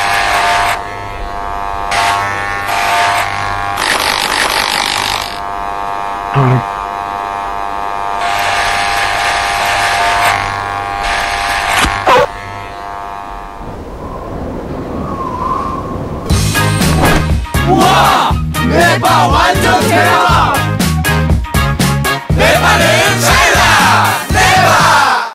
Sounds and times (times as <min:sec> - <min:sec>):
Music: 0:16.3 - 0:25.3.